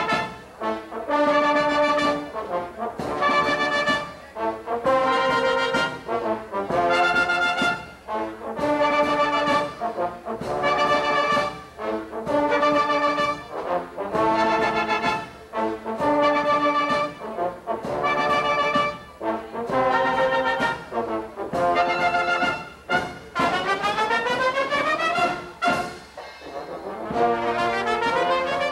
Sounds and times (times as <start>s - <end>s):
Musical instrument: 17.8s - 28.7s.